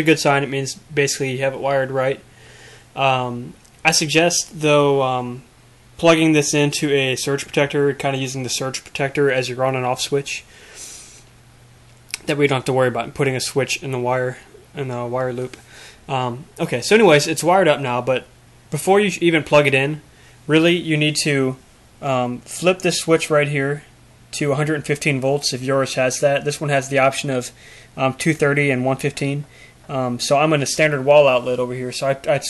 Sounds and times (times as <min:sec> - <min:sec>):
Speech: 0:00.0 - 0:02.2, 0:03.0 - 0:10.5, 0:12.1 - 0:32.4.